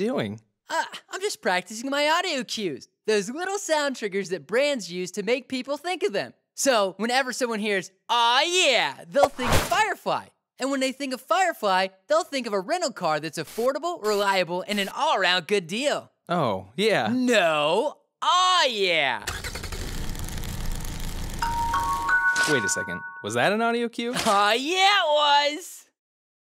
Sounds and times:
Speech: 0.0 - 19.3, 22.5 - 25.9
Car: 19.3 - 21.4
Music: 21.4 - 23.6.

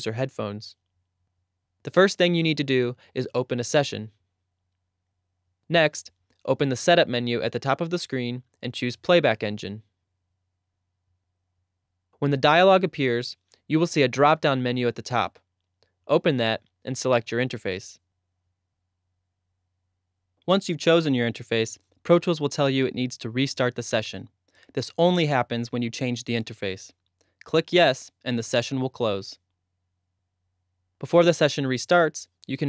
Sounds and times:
Speech: 0.0 - 0.8, 1.9 - 4.2, 5.7 - 9.9, 12.2 - 15.4, 16.1 - 18.0, 20.4 - 29.4, 31.0 - 32.6.

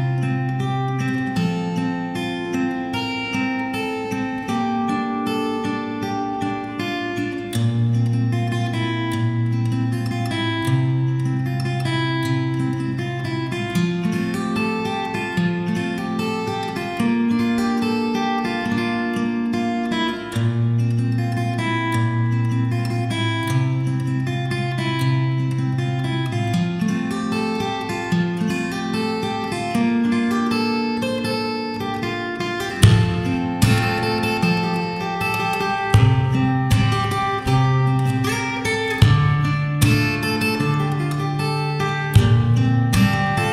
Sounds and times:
Acoustic guitar: 0.0 - 43.5
Strum: 20.4 - 43.5.

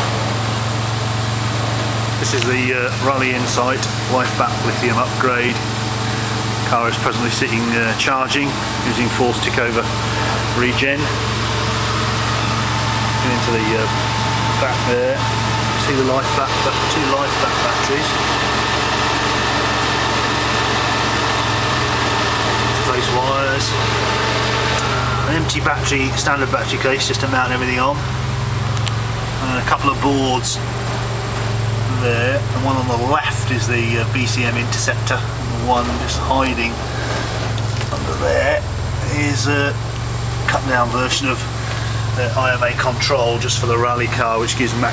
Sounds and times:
Vehicle: 0.0 - 44.9
Speech: 2.2 - 5.7, 6.6 - 11.2, 13.2 - 18.3, 22.7 - 23.8, 25.1 - 28.1, 29.4 - 30.6, 31.8 - 36.8, 37.9 - 39.8, 40.5 - 44.9.

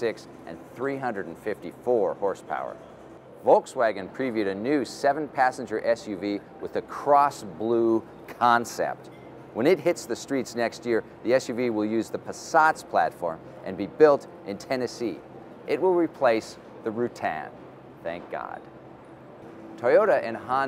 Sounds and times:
Speech: 0.0 - 2.8, 3.4 - 18.7, 19.8 - 20.6.

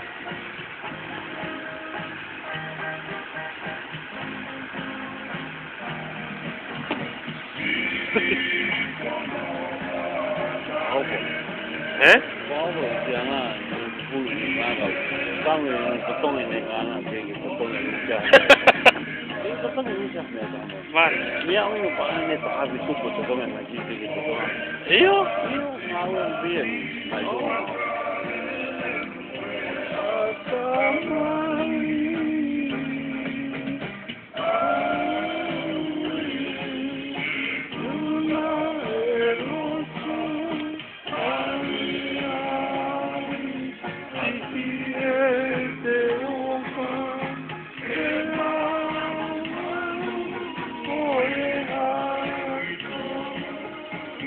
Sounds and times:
Music: 0.0 - 54.2.

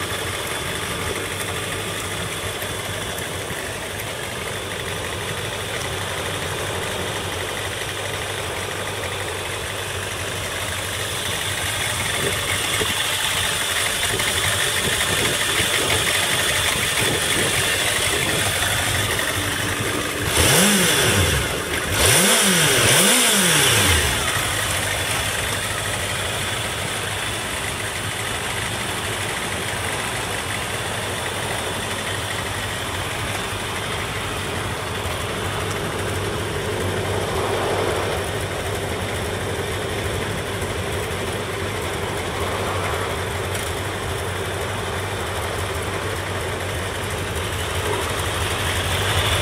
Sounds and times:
Motorcycle: 0.0 - 49.4
Rattle: 0.0 - 49.4.

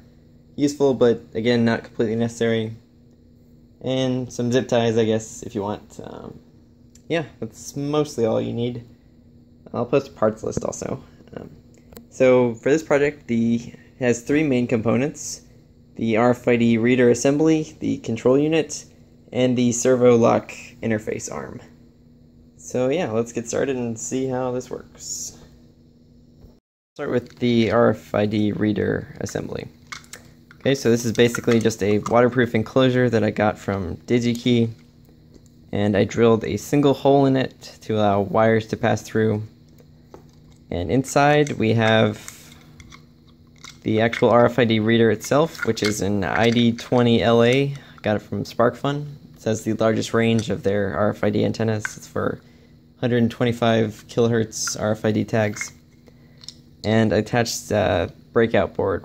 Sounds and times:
Speech: 0.6 - 2.8, 3.8 - 6.4, 7.0 - 8.9, 9.6 - 21.8, 22.6 - 25.5, 27.0 - 29.8, 30.6 - 34.8, 35.7 - 39.5, 40.7 - 42.6, 43.8 - 52.4, 53.0 - 55.8, 56.8 - 59.0.

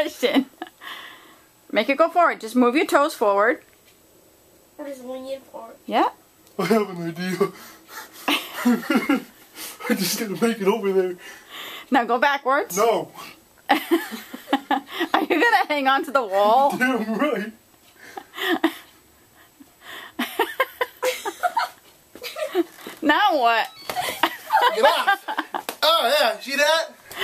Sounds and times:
Inside, small room: 0.0 - 27.2.

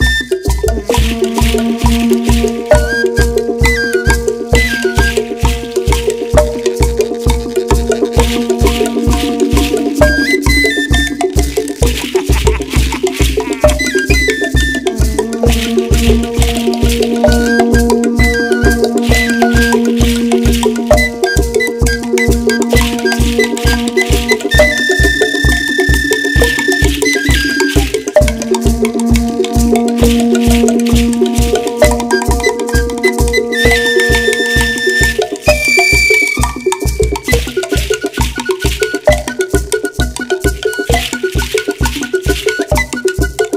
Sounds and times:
Folk music: 0.0 - 43.5.

